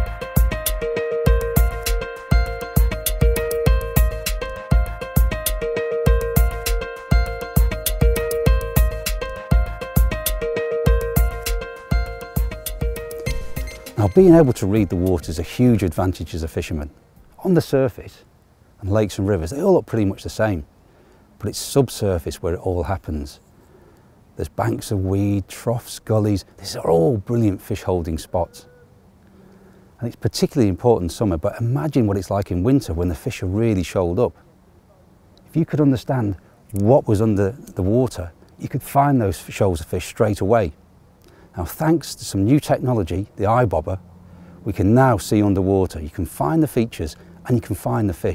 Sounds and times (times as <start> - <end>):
Speech: 14.0 - 20.7, 21.4 - 23.4, 24.4 - 28.7, 30.0 - 34.4, 35.5 - 40.8, 41.6 - 44.0, 44.7 - 48.3.